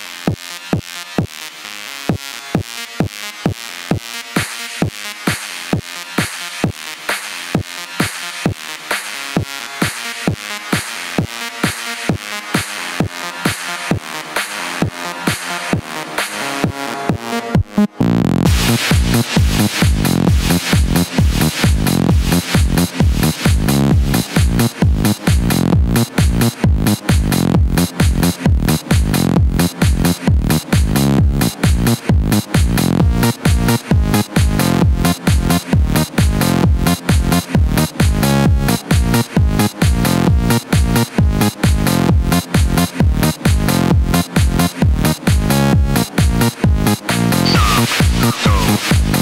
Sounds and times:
Music: 0.0 - 49.2.

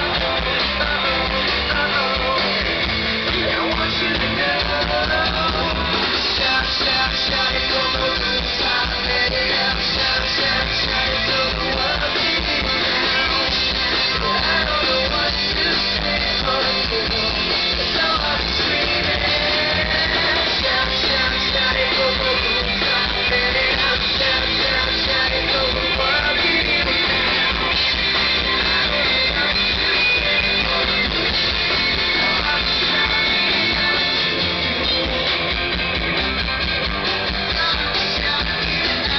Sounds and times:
Music: 0.0 - 39.1.

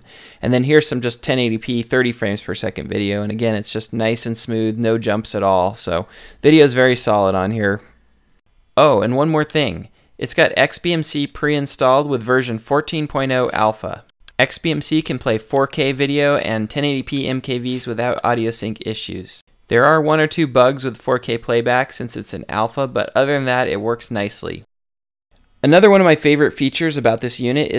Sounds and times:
Speech: 0.4 - 8.0, 8.8 - 24.7, 25.6 - 27.7.

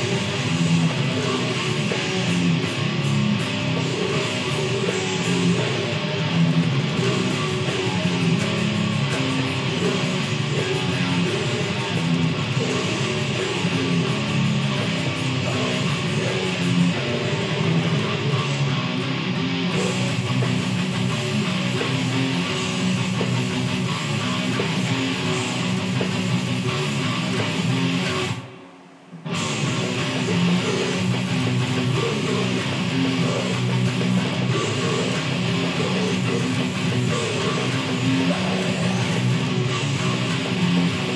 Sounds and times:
Electric guitar: 0.0 - 41.1.

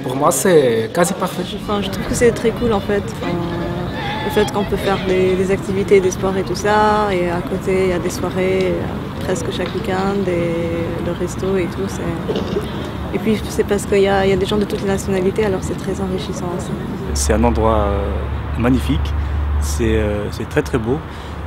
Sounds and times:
Speech: 0.0 - 12.6, 13.2 - 21.0.

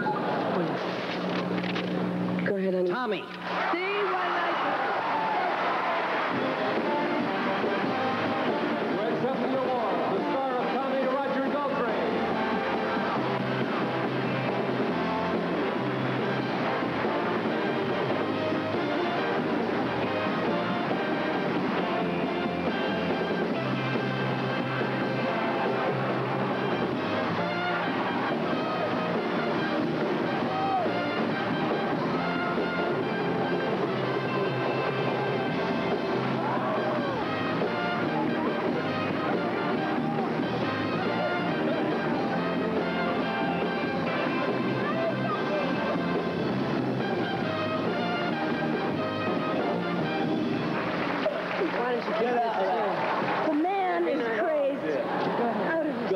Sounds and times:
Funny music: 3.9 - 54.2.

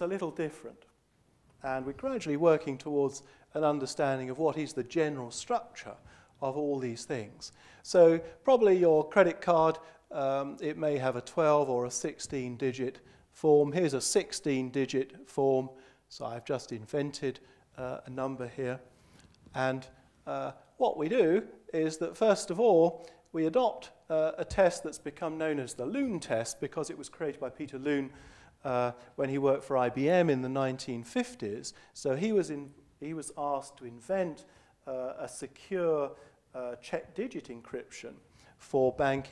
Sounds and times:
Speech: 0.0 - 0.9, 1.6 - 18.9, 19.5 - 39.3.

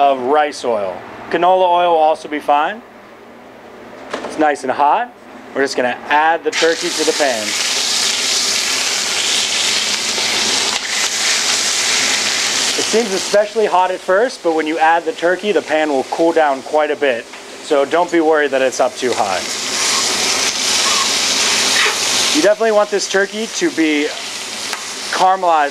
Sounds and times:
Speech: 0.0 - 2.8, 4.3 - 7.6, 12.8 - 19.5, 22.4 - 24.2, 25.1 - 25.7.

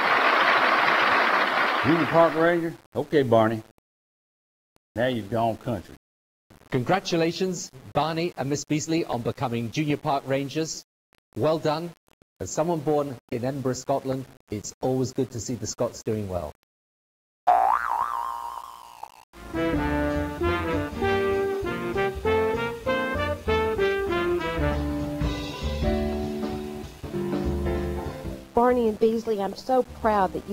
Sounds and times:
Boing: 17.5 - 19.3
Music: 19.4 - 30.5.

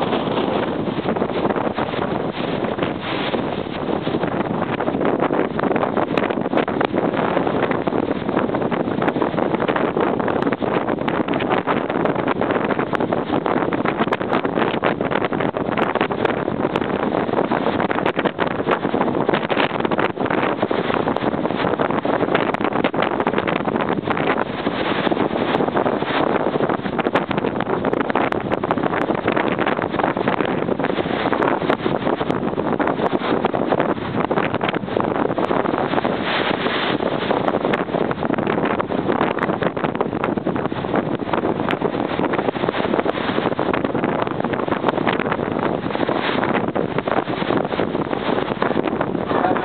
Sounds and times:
Wind noise (microphone): 0.0 - 49.6.

